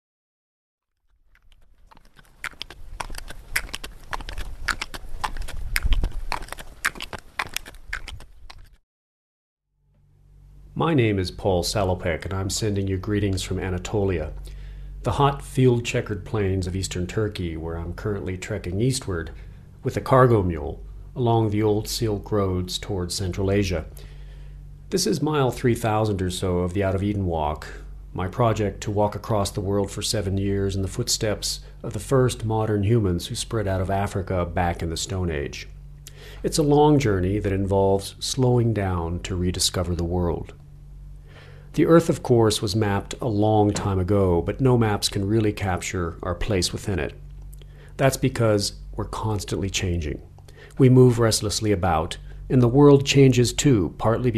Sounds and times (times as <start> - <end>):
Outside, rural or natural: 0.9 - 8.8.